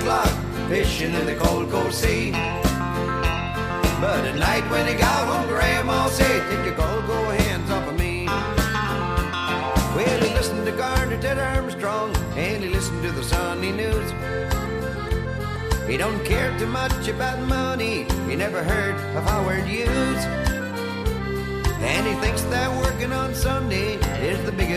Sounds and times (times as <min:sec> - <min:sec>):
Music: 0:00.0 - 0:24.7.